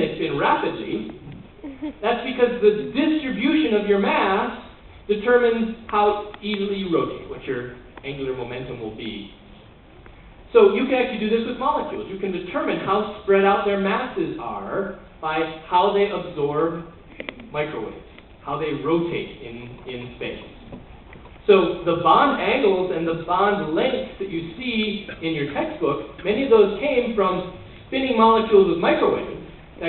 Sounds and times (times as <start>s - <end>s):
Speech: 0.0s - 9.4s, 17.5s - 20.6s, 21.5s - 29.8s.